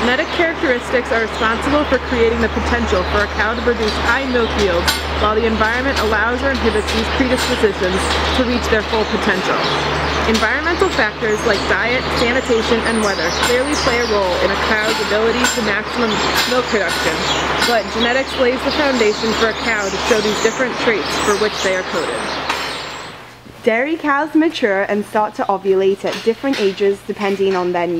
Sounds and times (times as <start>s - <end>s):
Speech: 0.0s - 22.3s, 23.6s - 27.9s.